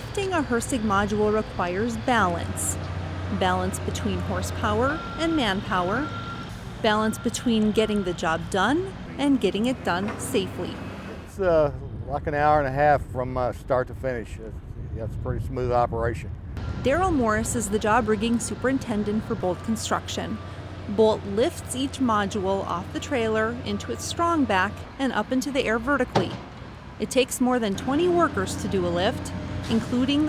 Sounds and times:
Speech: 0:11.4 - 0:16.3, 0:20.9 - 0:26.4, 0:27.0 - 0:30.2.

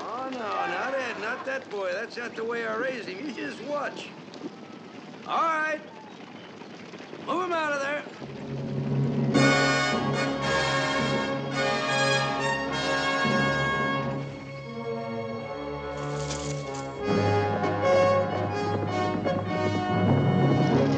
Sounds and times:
Speech: 0:00.0 - 0:04.1, 0:05.3 - 0:05.9, 0:07.3 - 0:08.1
Music: 0:08.4 - 0:20.9.

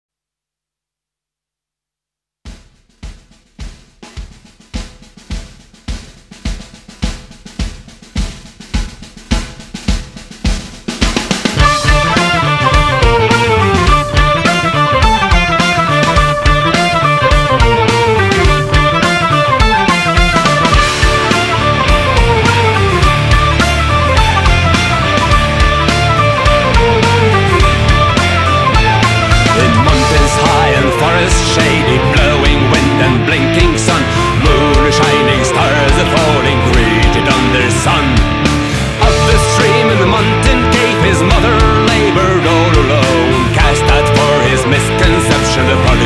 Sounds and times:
Drum: 0:02.4 - 0:46.0
Drum kit: 0:02.5 - 0:46.0.

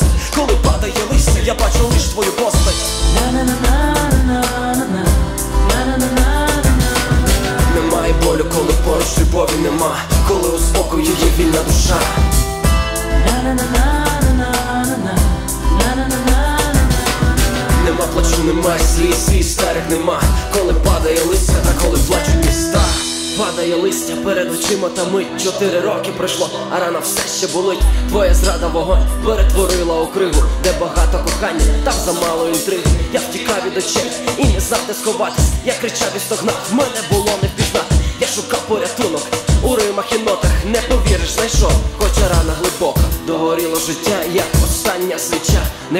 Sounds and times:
Music: 0:00.0 - 0:45.9
Singing: 0:00.0 - 0:45.9.

